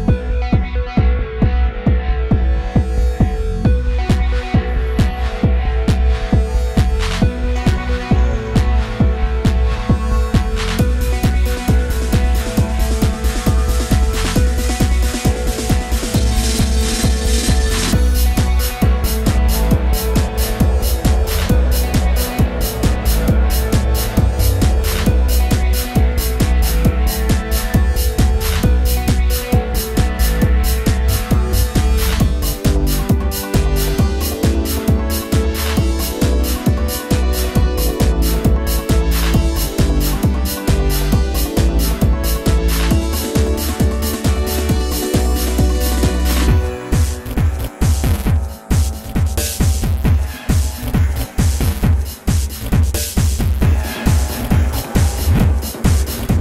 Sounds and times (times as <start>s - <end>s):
Music: 0.0s - 56.4s.